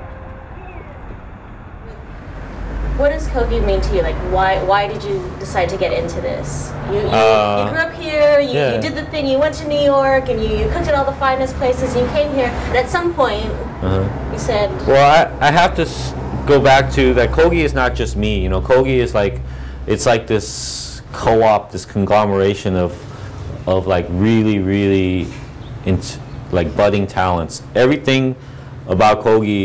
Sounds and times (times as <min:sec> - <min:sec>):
Speech: 0:06.9 - 0:09.2, 0:09.9 - 0:23.0, 0:23.7 - 0:29.6.